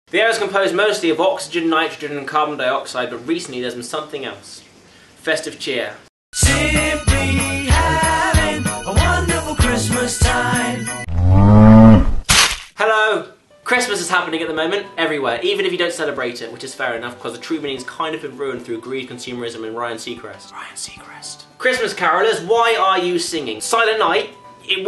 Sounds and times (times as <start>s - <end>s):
Speech: 0.1s - 6.1s, 12.8s - 24.8s
Jingle (music): 6.4s - 11.1s.